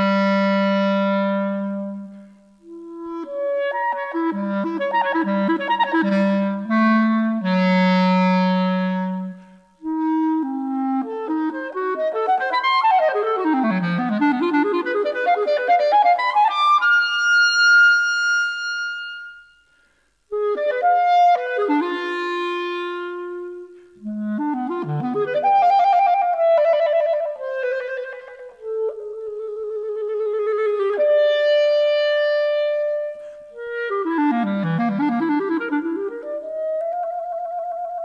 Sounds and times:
Classical music: 0:00.0 - 0:19.6, 0:20.3 - 0:38.0
Clarinet: 0:00.0 - 0:38.0.

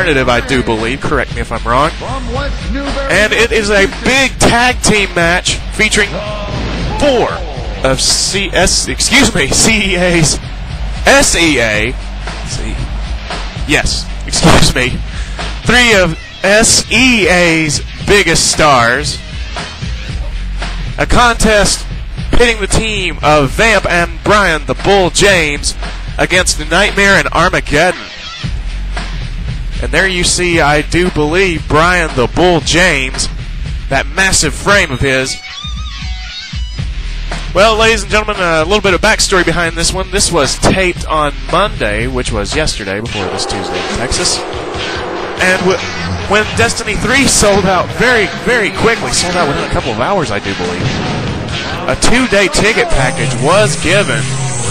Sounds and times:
Speech: 0:00.0 - 0:10.4, 0:11.1 - 0:12.8, 0:13.7 - 0:15.0, 0:15.6 - 0:19.2, 0:21.0 - 0:28.1, 0:29.8 - 0:35.4, 0:37.6 - 0:44.4, 0:45.4 - 0:50.9, 0:51.8 - 0:54.7
Music: 0:00.0 - 0:54.7.

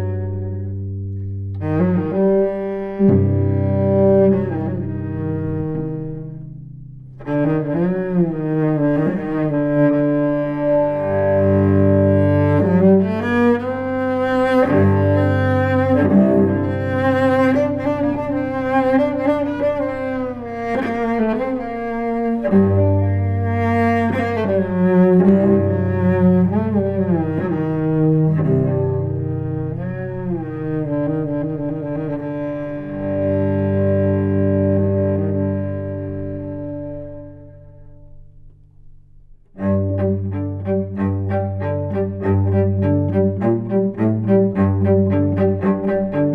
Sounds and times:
Cello: 0:00.0 - 0:46.3.

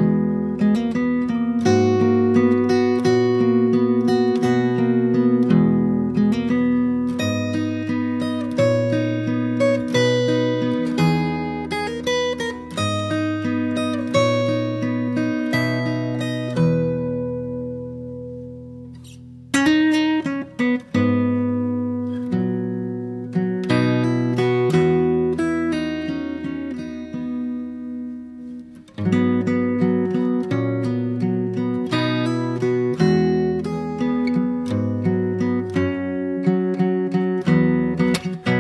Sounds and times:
Acoustic guitar: 0:00.0 - 0:38.6.

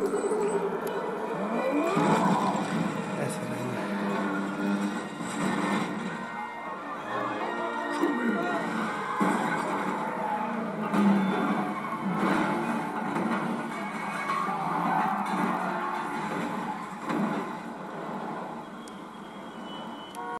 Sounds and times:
Smash, crash: 0:01.9 - 0:03.2, 0:08.6 - 0:17.8.

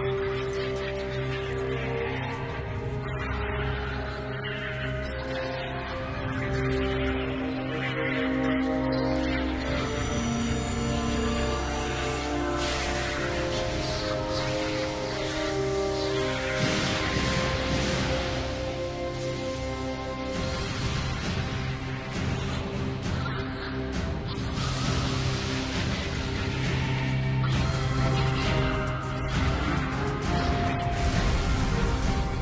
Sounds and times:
Music: 0:00.0 - 0:32.4.

